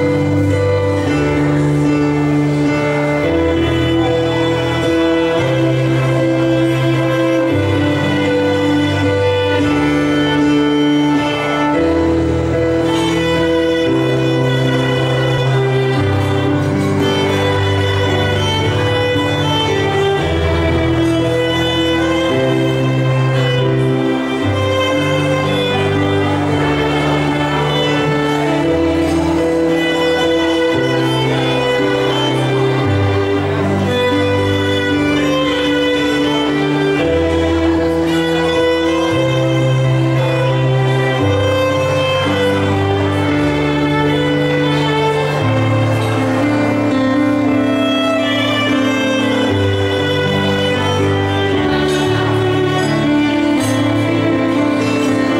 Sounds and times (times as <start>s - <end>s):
Violin, fiddle: 0.0s - 55.3s.